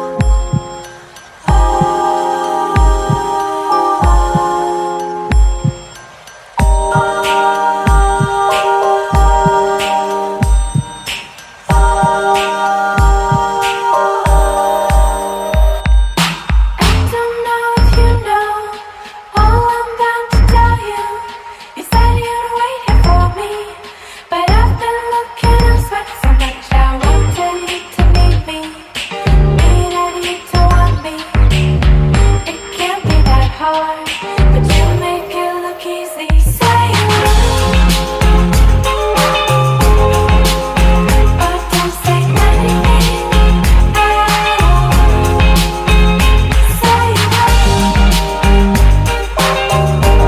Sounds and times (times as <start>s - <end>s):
Music: 0.0s - 50.2s.